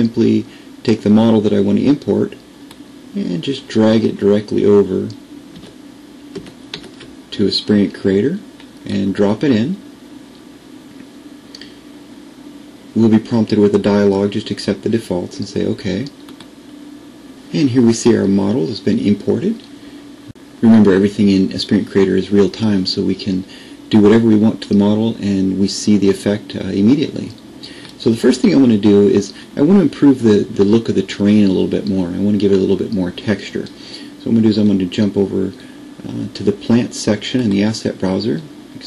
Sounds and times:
Speech: 0:00.0 - 0:02.5, 0:03.1 - 0:05.2, 0:07.3 - 0:09.9, 0:13.0 - 0:16.2, 0:17.5 - 0:19.7, 0:20.6 - 0:38.8.

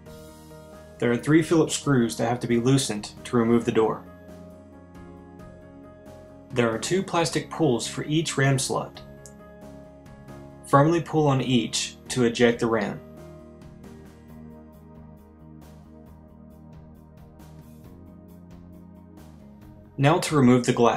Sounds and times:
Music: 0:00.0 - 0:20.9
Speech: 0:01.0 - 0:04.0, 0:06.5 - 0:09.0, 0:10.7 - 0:13.0, 0:20.0 - 0:20.9.

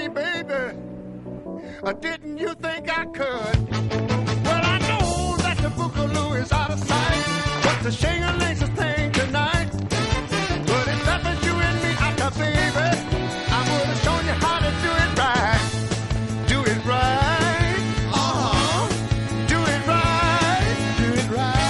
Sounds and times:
Music: 0:00.0 - 0:21.6.

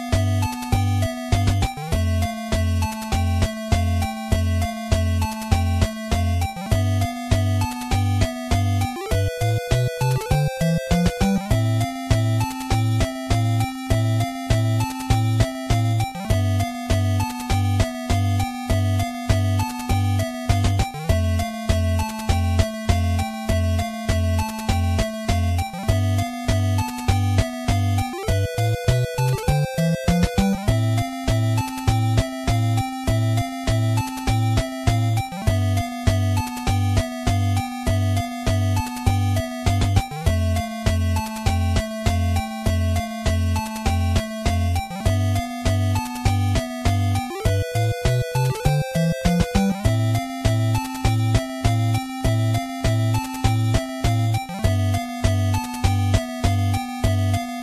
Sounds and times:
Music: 0:00.0 - 0:57.6.

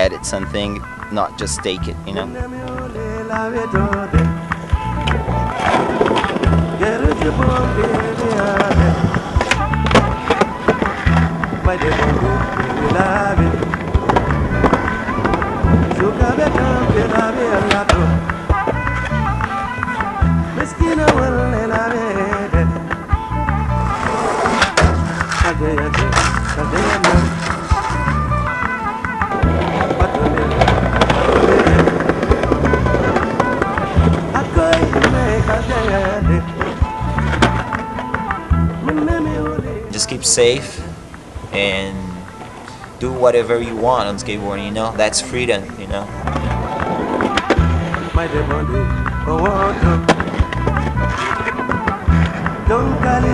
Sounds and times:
Skateboard: 0:03.4 - 0:39.2, 0:45.0 - 0:53.3.

